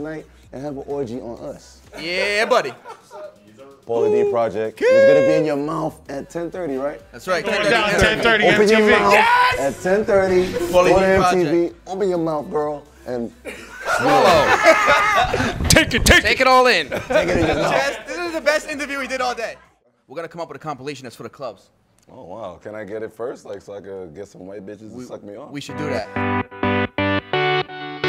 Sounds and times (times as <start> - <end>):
Music: 0.0 - 19.6, 23.5 - 28.0
Laughter: 2.6 - 3.4, 13.4 - 15.6, 16.8 - 18.4.